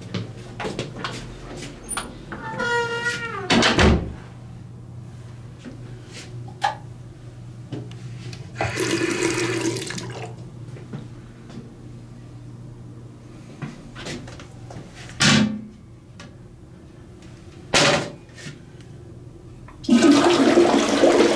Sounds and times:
Sink (filling or washing): 8.6s - 10.4s
Water: 8.6s - 10.4s.

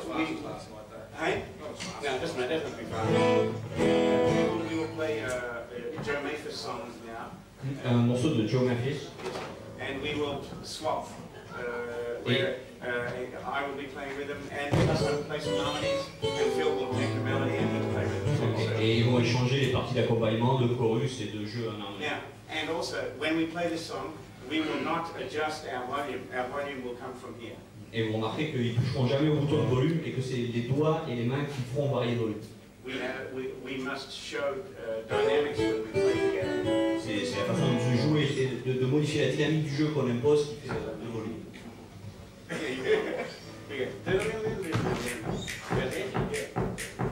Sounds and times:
Speech: 0.0s - 3.5s, 4.4s - 41.8s, 42.5s - 46.7s
Strum: 2.9s - 5.2s, 35.1s - 38.2s
Acoustic guitar: 2.9s - 5.3s, 14.8s - 19.4s, 35.1s - 38.4s.

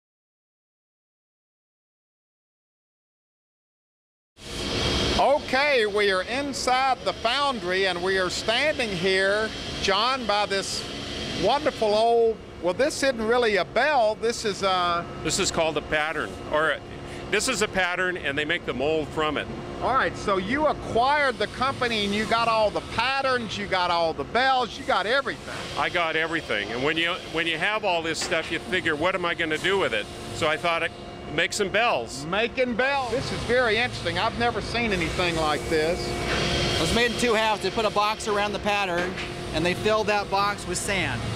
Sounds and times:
Speech: 5.2s - 10.8s, 11.4s - 36.1s, 36.8s - 41.2s.

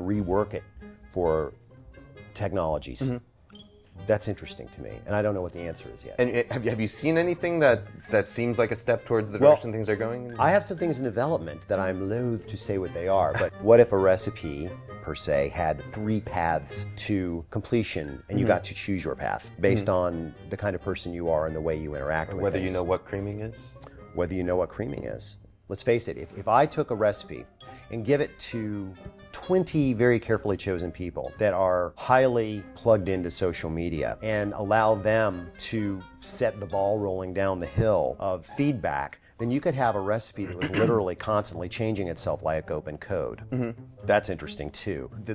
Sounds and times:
Speech: 0.0s - 0.6s, 1.2s - 1.5s, 2.4s - 3.2s, 4.1s - 45.3s
Music: 0.0s - 45.3s.

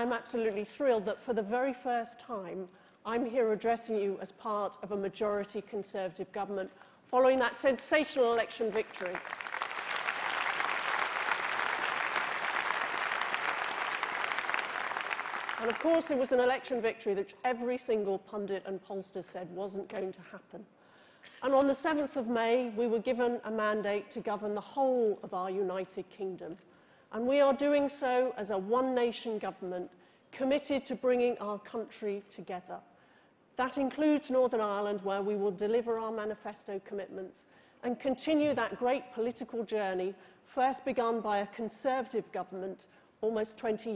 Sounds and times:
Female speech, woman speaking: 0.0s - 9.2s, 15.6s - 20.7s, 21.4s - 26.6s, 27.2s - 32.8s, 33.6s - 43.9s.

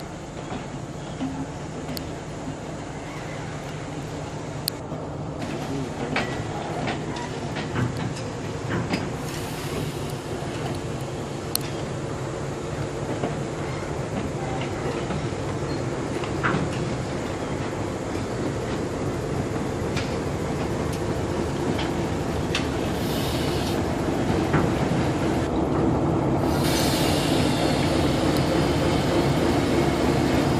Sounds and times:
Railroad car, train wagon: 0.0s - 30.5s
Train: 0.0s - 30.5s
Train wheels squealing: 13.6s - 15.9s, 26.5s - 29.6s.

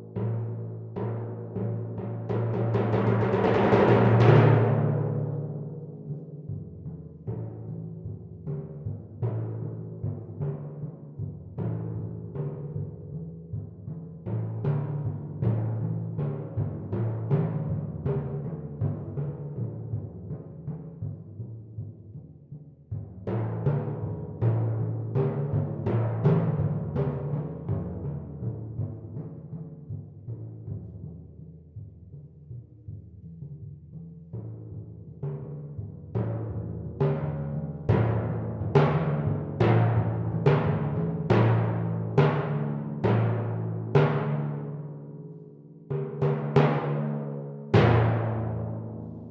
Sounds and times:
Timpani: 0.0s - 22.3s, 22.9s - 31.4s, 34.4s - 49.3s.

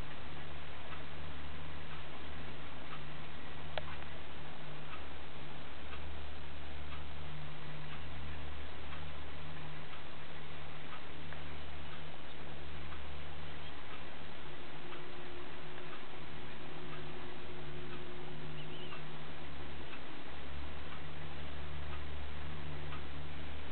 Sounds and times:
Bird: 13.4s - 13.9s, 18.5s - 19.1s.

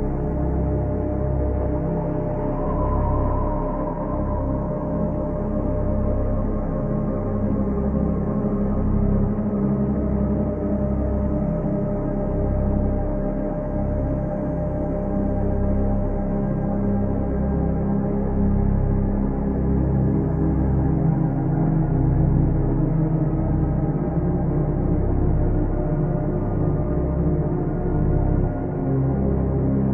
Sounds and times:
Ambient music: 0.0s - 29.9s.

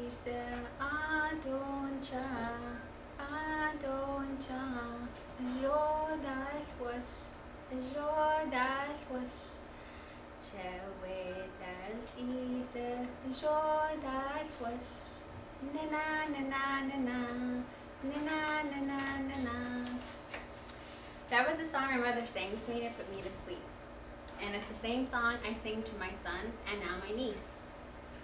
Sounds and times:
Female speech, woman speaking: 21.3s - 23.7s, 24.4s - 27.6s.

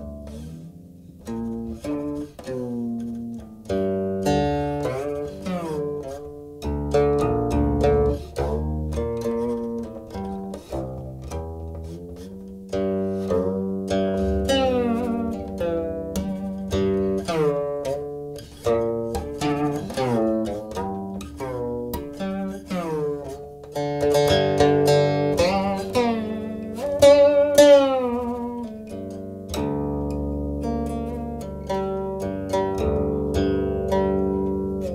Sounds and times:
Music: 0.0s - 34.9s.

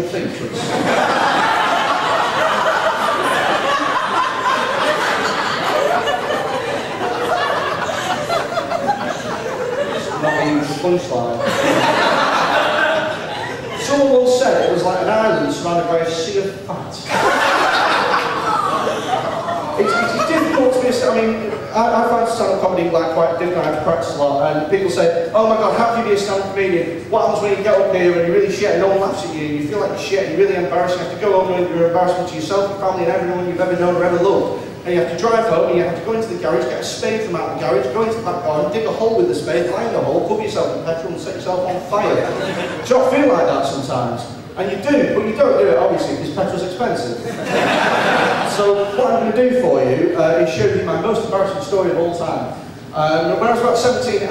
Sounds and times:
Male speech, man speaking: 0.0s - 0.7s, 10.1s - 11.5s, 13.7s - 17.1s, 19.8s - 47.3s, 48.4s - 54.3s.

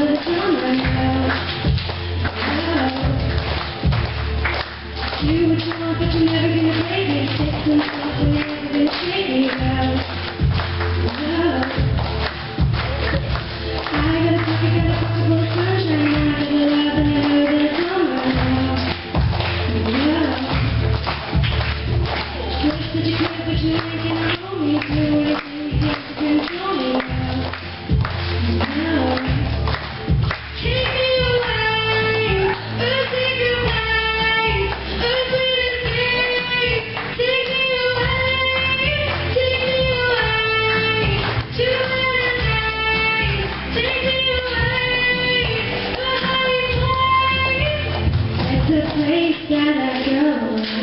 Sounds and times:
Music: 0.0s - 50.8s.

